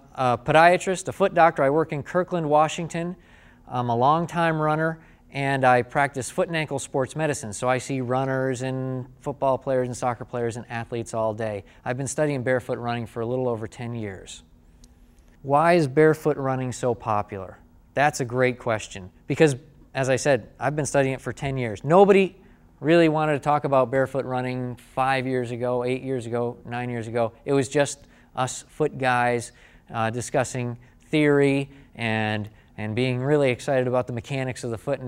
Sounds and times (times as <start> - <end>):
Speech: 0.0 - 14.5, 15.4 - 35.0.